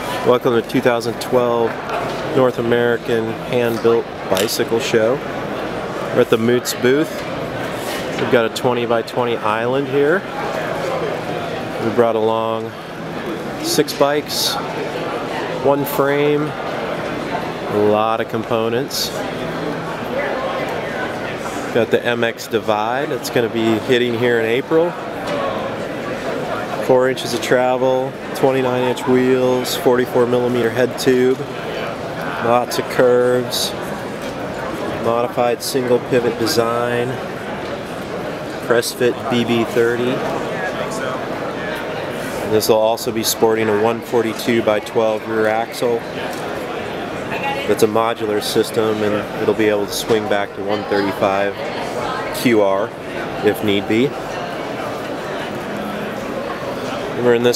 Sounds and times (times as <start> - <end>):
Speech: 0.0 - 5.3, 6.1 - 7.3, 8.1 - 16.7, 17.4 - 33.9, 34.8 - 37.2, 38.6 - 46.5, 47.3 - 54.6, 56.9 - 57.5.